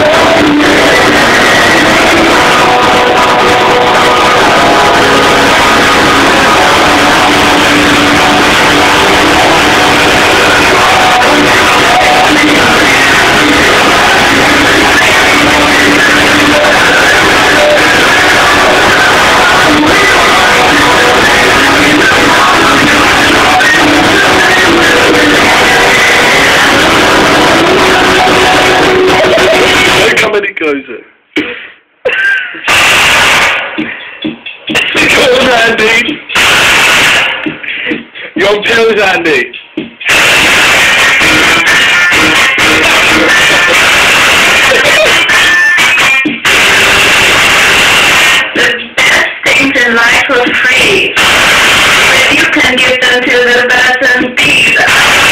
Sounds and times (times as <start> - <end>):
Heavy metal: 0.0 - 30.3, 32.1 - 37.9, 40.0 - 55.3
Speech: 30.0 - 31.1, 38.4 - 39.6.